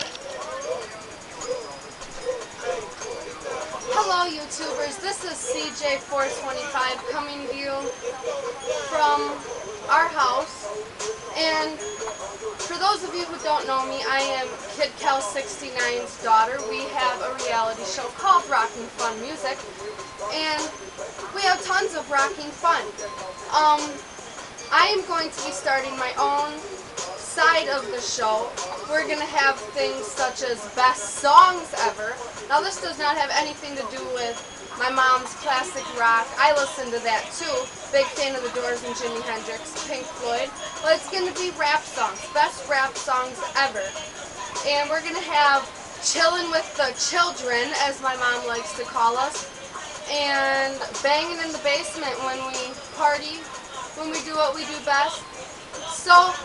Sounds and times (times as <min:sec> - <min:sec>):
Music: 0:00.0 - 0:56.4
Speech: 0:03.9 - 0:07.9, 0:08.8 - 0:10.7, 0:11.4 - 0:11.8, 0:12.7 - 0:19.6, 0:20.3 - 0:20.8, 0:21.4 - 0:22.9, 0:23.5 - 0:24.0, 0:24.7 - 0:26.6, 0:27.2 - 0:44.0, 0:44.6 - 0:49.4, 0:50.1 - 0:56.4.